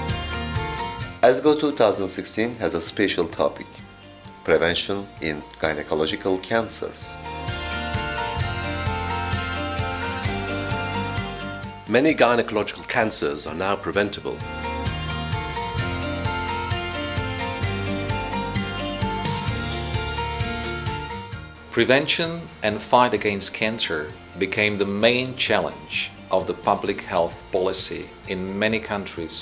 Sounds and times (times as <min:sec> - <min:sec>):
Music: 0:00.0 - 0:29.4
Speech: 0:01.2 - 0:03.8, 0:04.4 - 0:07.2, 0:11.9 - 0:14.4, 0:21.8 - 0:29.4.